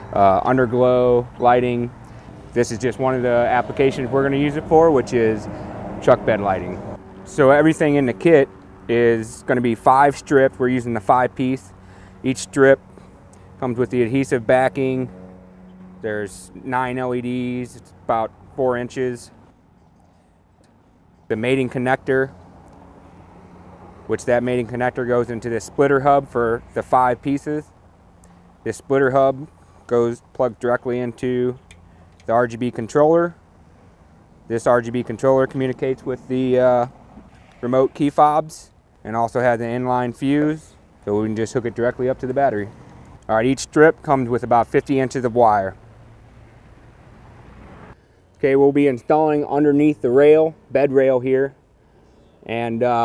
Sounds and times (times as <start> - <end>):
Speech: 0.1 - 1.9, 2.6 - 12.8, 13.6 - 15.1, 16.0 - 19.4, 21.3 - 22.4, 24.1 - 27.7, 28.6 - 31.6, 32.2 - 33.4, 34.5 - 36.9, 37.6 - 42.7, 43.3 - 45.8, 48.4 - 51.6, 52.4 - 53.0.